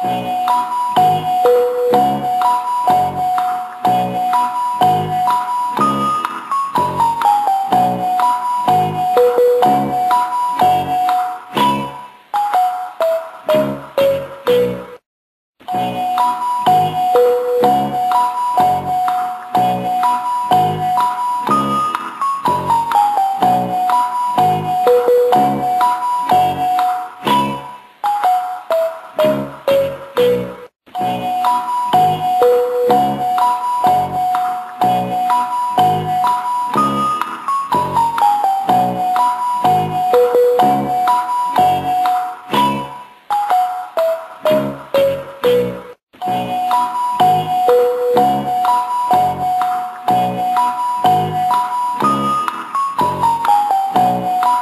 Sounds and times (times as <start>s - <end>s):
Music: 0.0s - 15.0s, 15.6s - 54.6s.